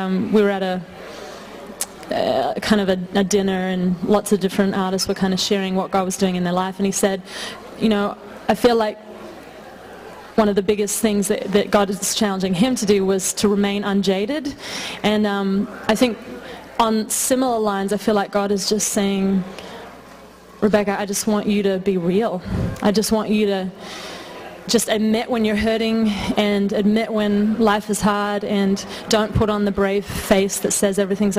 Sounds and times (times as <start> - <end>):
Speech: 0.0 - 0.9, 1.8 - 9.0, 10.3 - 19.5, 20.6 - 23.8, 24.6 - 31.3.